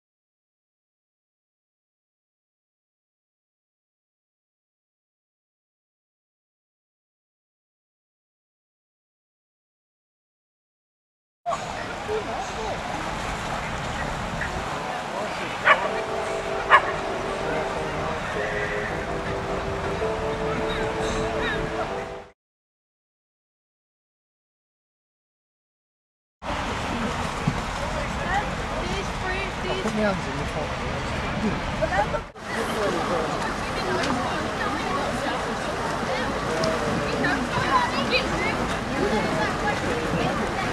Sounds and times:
Speech: 11.5s - 22.0s, 26.5s - 40.7s
Music: 15.7s - 22.4s.

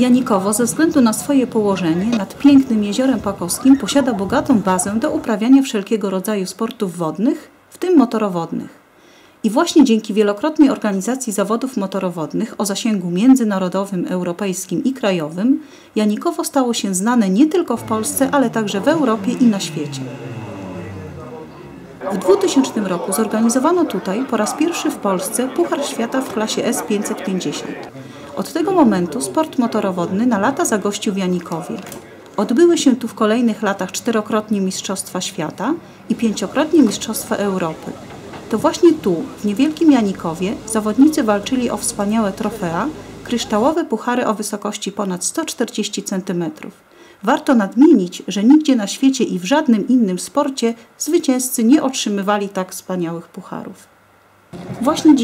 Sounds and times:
Speech: 0.0s - 8.8s, 9.4s - 53.9s, 54.8s - 55.2s.

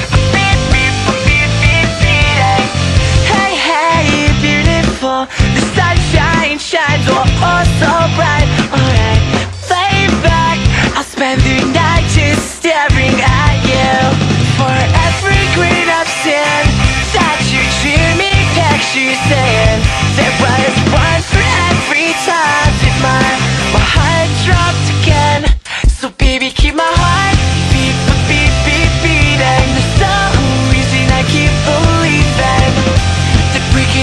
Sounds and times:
Music: 0.0s - 34.0s.

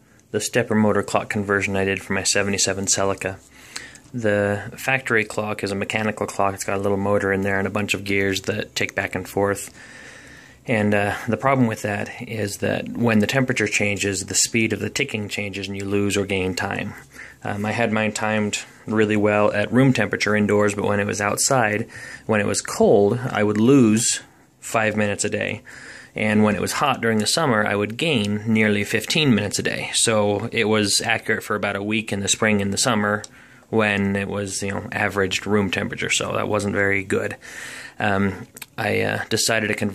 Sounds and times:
Speech: 0.3s - 3.5s, 4.1s - 9.8s, 10.6s - 37.4s, 38.0s - 39.9s.

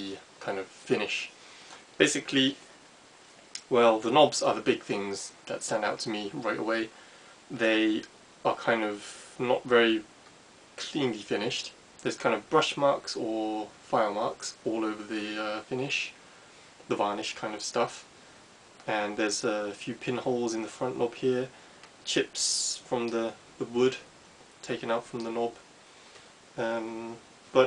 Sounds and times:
Speech: 0.0s - 1.4s, 2.0s - 2.6s, 3.6s - 10.1s, 10.8s - 16.2s, 16.9s - 18.1s, 18.8s - 25.7s, 26.6s - 27.6s.

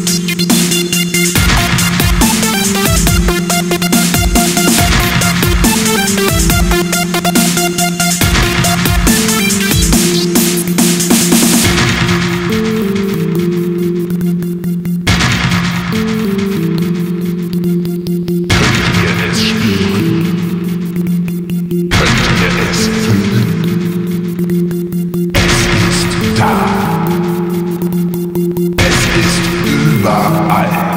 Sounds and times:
Dubstep: 0.0s - 13.9s, 18.5s - 30.9s.

